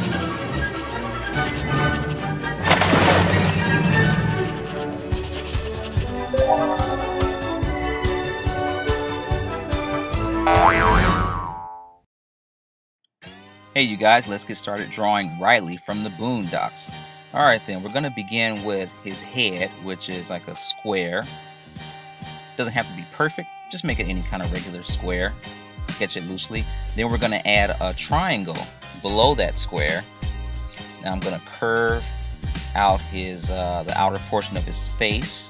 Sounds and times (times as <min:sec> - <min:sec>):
Music: 0:00.0 - 0:11.2, 0:13.2 - 0:35.4.